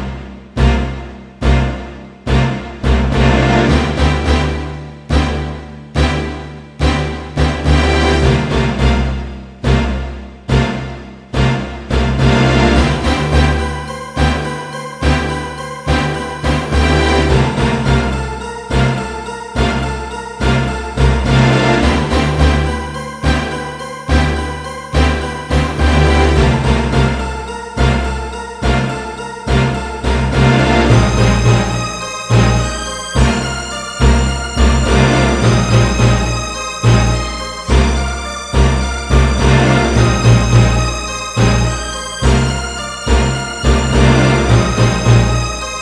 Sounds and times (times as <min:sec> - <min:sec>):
Music: 0:00.0 - 0:45.8.